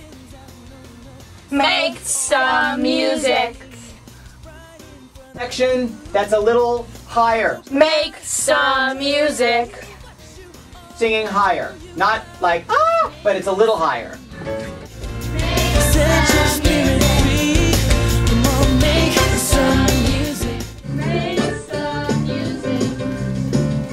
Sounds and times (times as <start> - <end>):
Rhythm and blues: 0.0 - 13.3, 14.2 - 23.9.